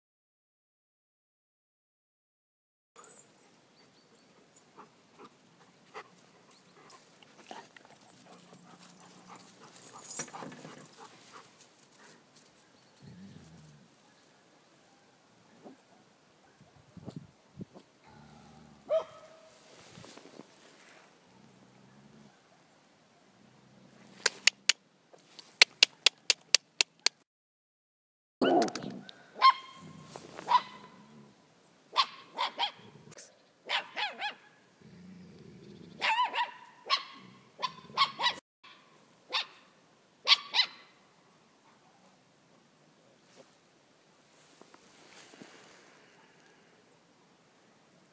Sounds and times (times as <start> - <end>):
Bow-wow: 18.8 - 19.6, 29.4 - 31.1, 32.0 - 33.0, 33.7 - 34.6, 36.0 - 39.6
Yip: 18.9 - 19.5, 29.4 - 31.0, 32.0 - 32.9, 33.7 - 34.6, 36.0 - 39.6, 40.2 - 40.9.